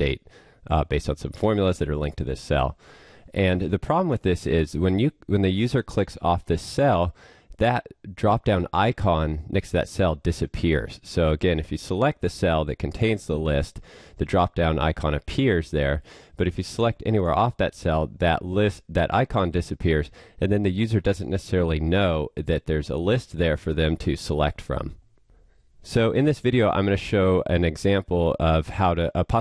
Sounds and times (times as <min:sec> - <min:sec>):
Speech: 0:00.0 - 0:25.0, 0:25.8 - 0:29.4.